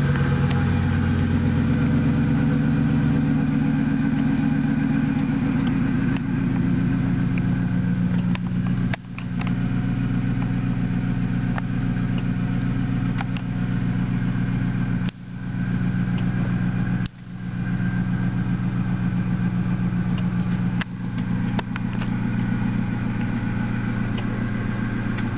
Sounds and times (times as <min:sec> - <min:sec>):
Car: 0:00.0 - 0:25.3.